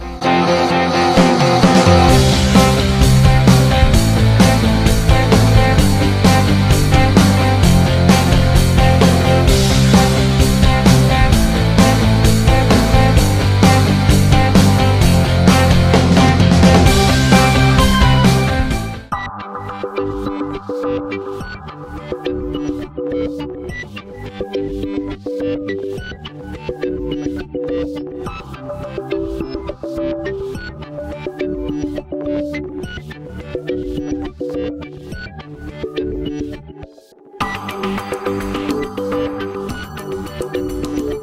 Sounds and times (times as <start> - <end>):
Music: 0.0 - 41.2.